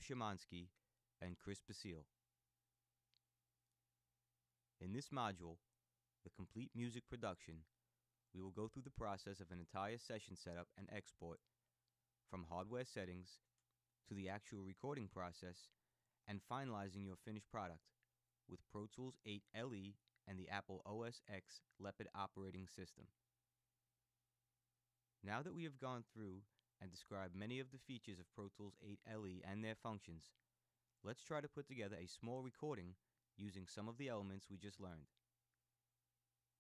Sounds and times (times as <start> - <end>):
Speech: 0.0 - 2.1, 4.8 - 5.7, 6.3 - 7.7, 8.3 - 11.5, 12.3 - 13.5, 14.1 - 23.2, 25.2 - 30.4, 31.0 - 35.2.